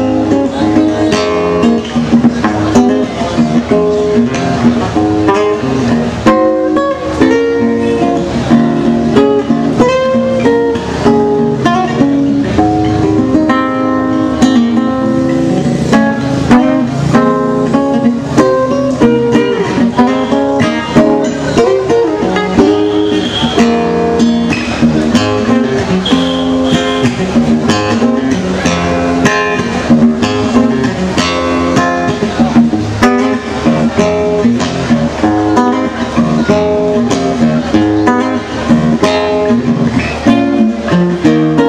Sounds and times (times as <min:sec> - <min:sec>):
Electric guitar: 0:00.0 - 0:41.6.